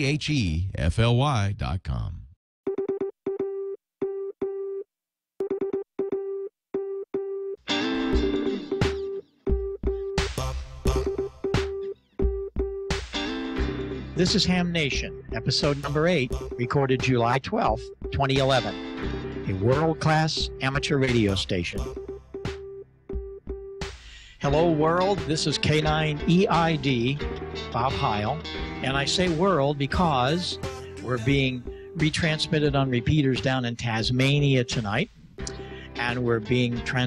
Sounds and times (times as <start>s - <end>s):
Speech: 0.0s - 2.3s, 14.2s - 18.8s, 19.5s - 21.9s, 24.4s - 27.2s, 27.8s - 35.1s, 36.0s - 37.0s
Music: 7.6s - 37.0s.